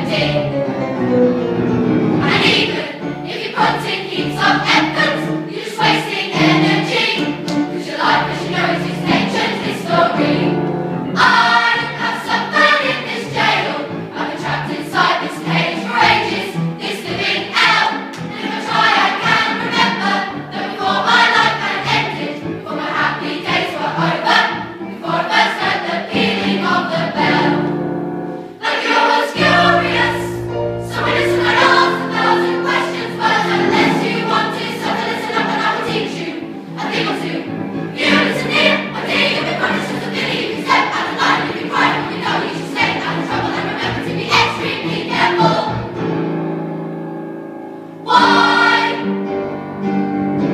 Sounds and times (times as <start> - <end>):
Choir: 0.0 - 0.7, 2.1 - 27.8, 28.5 - 46.0, 48.0 - 49.3.